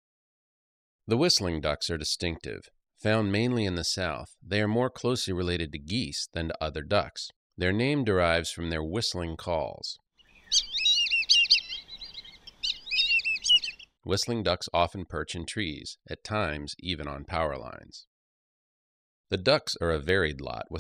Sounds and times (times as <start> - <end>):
Speech: 1.1 - 10.0, 14.1 - 18.1, 19.3 - 20.8
Bird vocalization, bird call, bird song: 10.2 - 14.0.